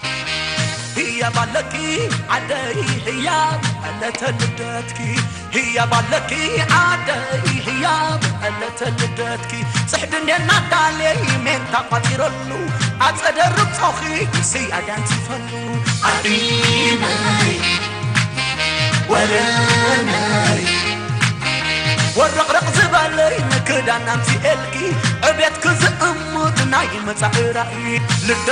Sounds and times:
Rhythm and blues: 0:00.0 - 0:28.5
Soul music: 0:00.0 - 0:28.5.

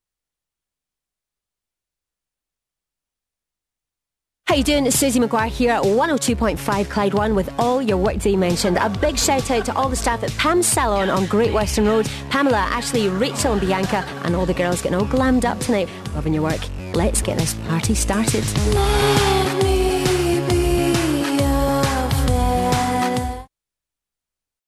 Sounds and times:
Speech: 0:04.5 - 0:18.7
Music: 0:04.5 - 0:23.5.

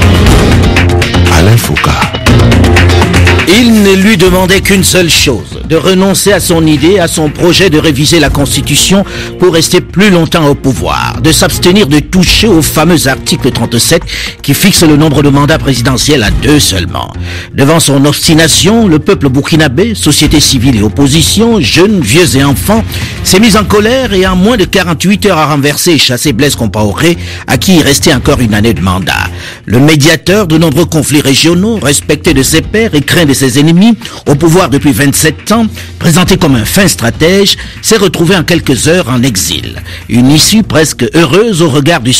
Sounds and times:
Music: 0:00.0 - 0:42.1
Speech: 0:01.3 - 0:02.2, 0:03.5 - 0:42.1.

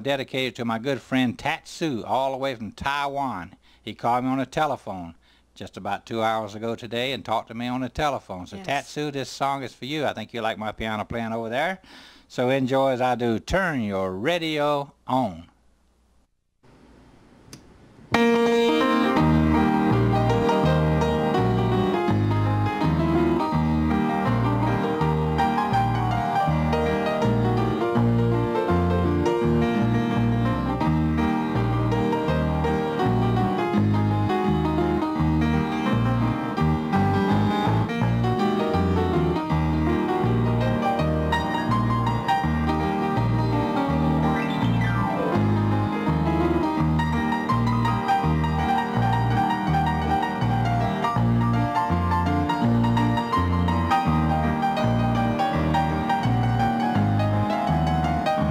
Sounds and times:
Music: 0:18.2 - 0:58.5.

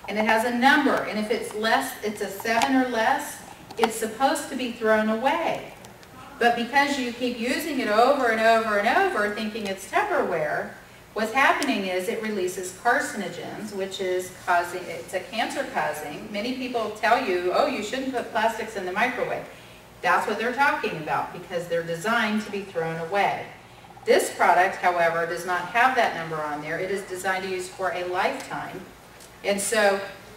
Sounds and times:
Female speech, woman speaking: 0:00.1 - 0:30.2.

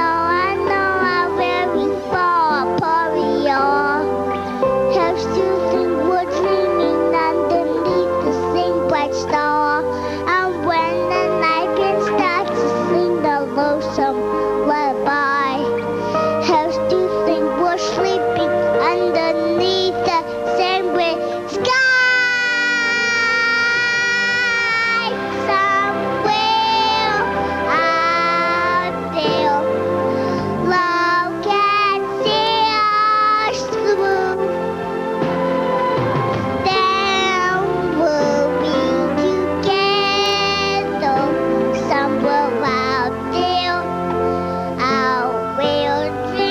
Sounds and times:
Child singing: 0:00.0 - 0:04.1, 0:04.8 - 0:15.8, 0:16.4 - 0:29.7, 0:30.6 - 0:34.5, 0:36.6 - 0:43.9, 0:44.8 - 0:46.5
Music: 0:00.0 - 0:46.5.

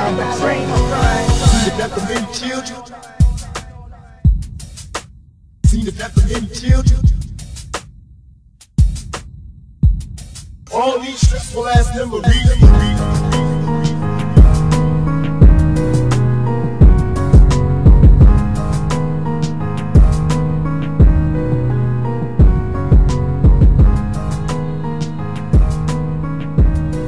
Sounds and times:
Music: 0:00.0 - 0:27.0.

